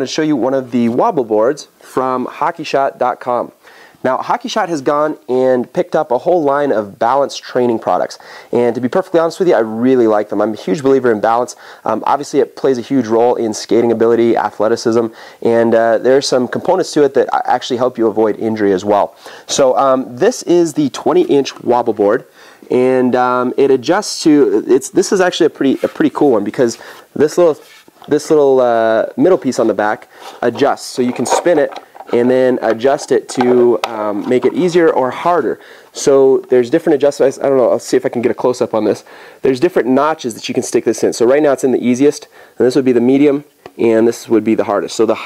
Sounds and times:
Speech: 0:00.0 - 0:45.2.

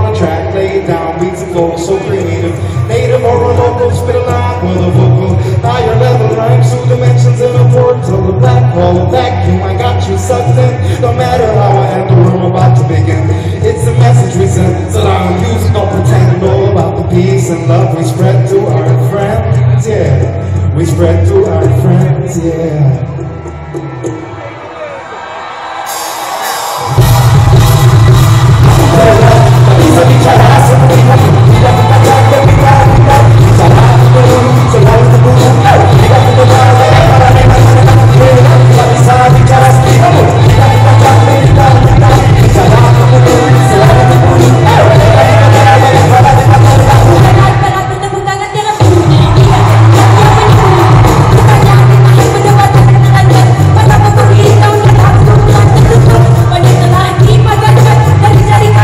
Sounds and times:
Speech: 0:00.0 - 0:23.1
Music: 0:00.0 - 0:58.8.

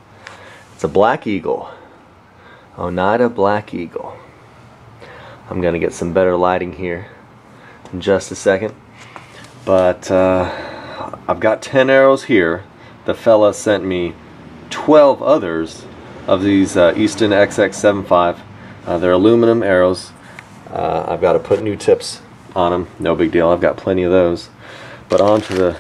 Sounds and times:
Speech: 0:00.8 - 0:01.8, 0:02.8 - 0:04.3, 0:05.5 - 0:07.2, 0:07.9 - 0:08.8, 0:09.7 - 0:24.5, 0:25.1 - 0:25.8.

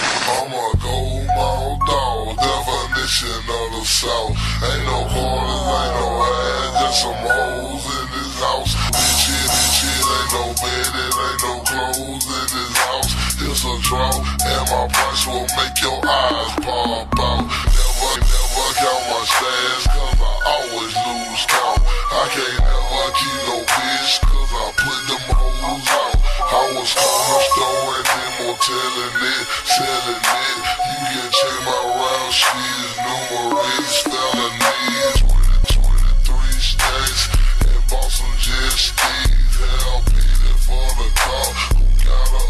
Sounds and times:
Music: 0:00.0 - 0:42.5.

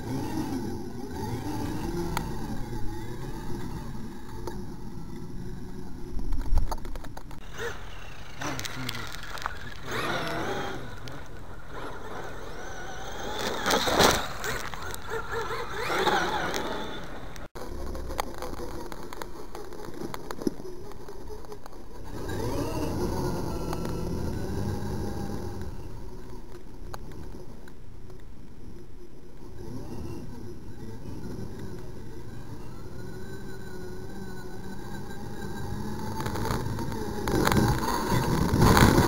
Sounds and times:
Vehicle: 0:00.0 - 0:39.0.

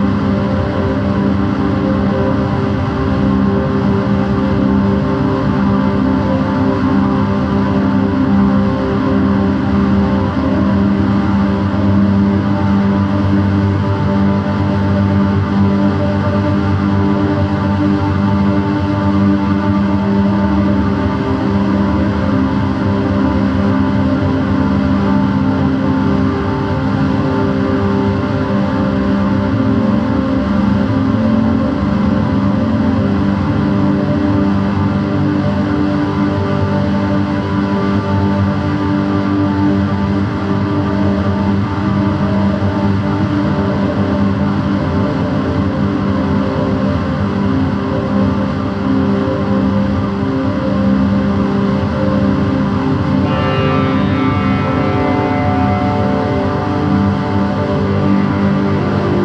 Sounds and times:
Music: 0:00.0 - 0:59.2.

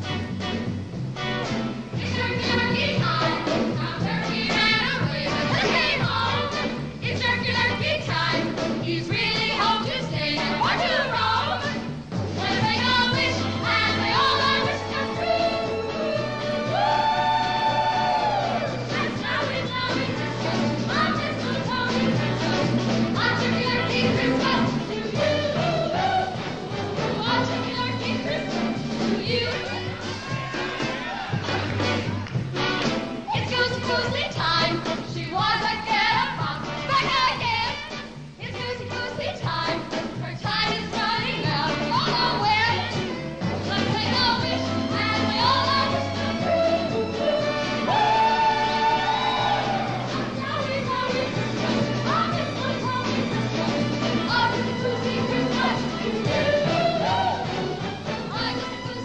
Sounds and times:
Music: 0:00.0 - 0:59.0.

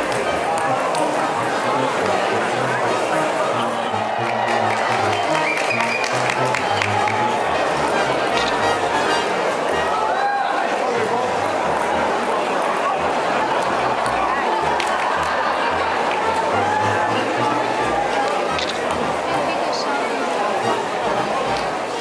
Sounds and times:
Music: 0:00.0 - 0:22.0
Speech: 0:00.0 - 0:22.0.

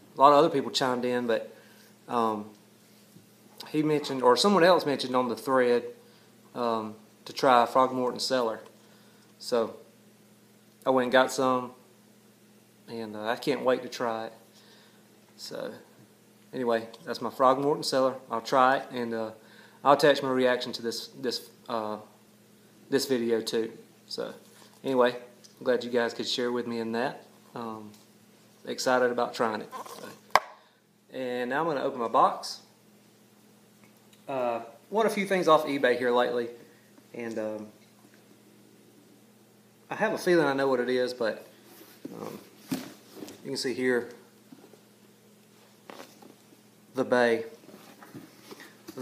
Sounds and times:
Speech: 0:00.2 - 0:01.5, 0:02.1 - 0:02.6, 0:03.6 - 0:06.0, 0:06.6 - 0:08.7, 0:09.4 - 0:09.8, 0:10.8 - 0:11.8, 0:12.9 - 0:14.4, 0:15.4 - 0:15.9, 0:16.5 - 0:22.1, 0:22.9 - 0:28.0, 0:28.6 - 0:30.2, 0:31.1 - 0:32.7, 0:34.3 - 0:37.8, 0:39.9 - 0:41.5, 0:43.4 - 0:44.2, 0:46.9 - 0:47.6.

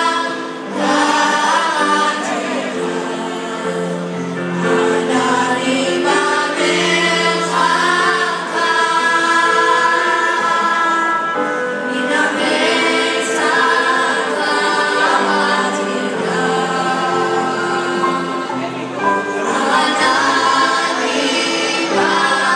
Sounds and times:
Choir: 0:00.0 - 0:22.5.

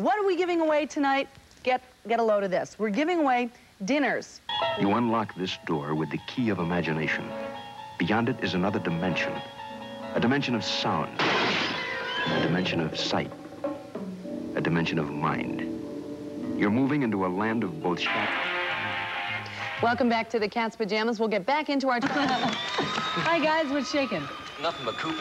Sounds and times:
Speech: 0:00.0 - 0:07.3, 0:08.0 - 0:09.4, 0:12.3 - 0:13.3, 0:14.6 - 0:15.7
Music: 0:04.5 - 0:20.5, 0:22.2 - 0:25.2.

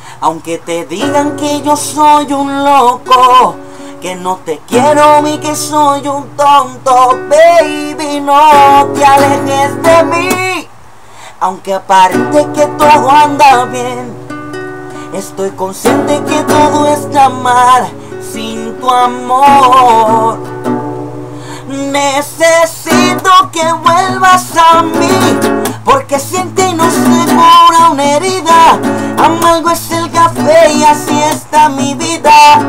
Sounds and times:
Guitar: 0:00.0 - 0:32.6.

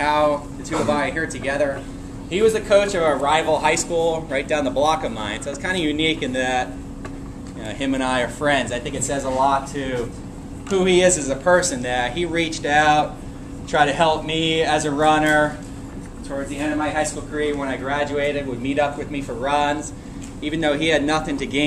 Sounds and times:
Speech: 0:00.0 - 0:06.8, 0:07.6 - 0:15.6, 0:16.2 - 0:21.6.

